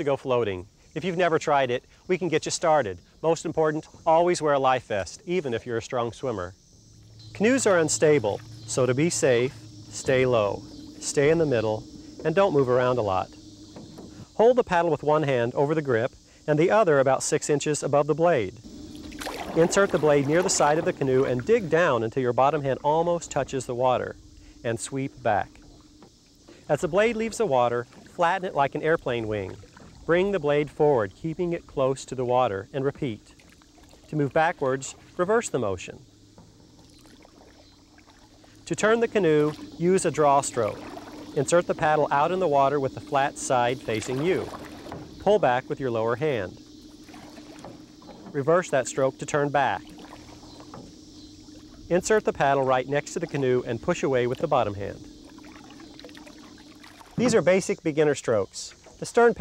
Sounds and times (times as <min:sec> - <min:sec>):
Speech: 0:00.0 - 0:06.5, 0:07.4 - 0:13.3, 0:14.4 - 0:18.6, 0:19.6 - 0:25.5, 0:26.7 - 0:33.3, 0:34.1 - 0:36.0, 0:38.7 - 0:40.8, 0:41.4 - 0:44.5, 0:45.2 - 0:46.6, 0:48.4 - 0:49.8, 0:51.9 - 0:55.0, 0:57.2 - 0:59.4
Rowboat, canoe, kayak: 0:00.0 - 0:59.4.